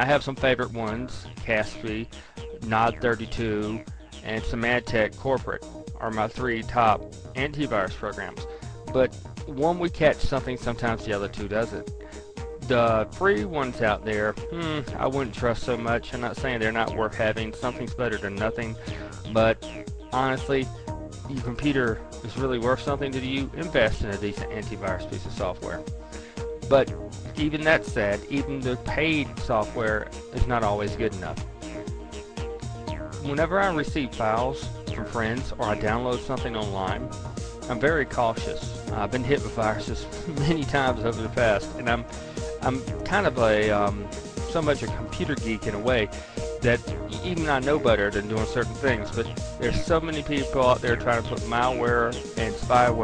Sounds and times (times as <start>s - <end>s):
Speech: 0.0s - 11.8s, 12.6s - 19.6s, 20.2s - 20.7s, 21.3s - 25.8s, 26.7s - 31.4s, 33.2s - 37.1s, 37.7s - 53.0s
Music: 0.0s - 53.0s.